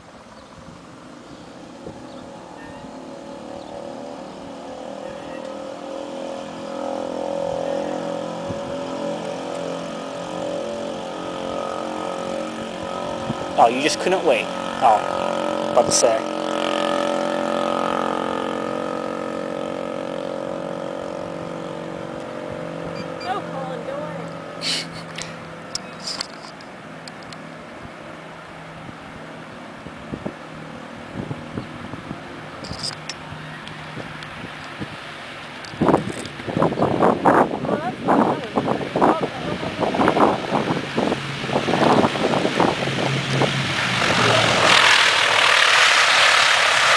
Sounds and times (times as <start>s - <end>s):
Speech: 13.6s - 15.0s, 23.3s - 24.3s, 37.7s - 40.0s.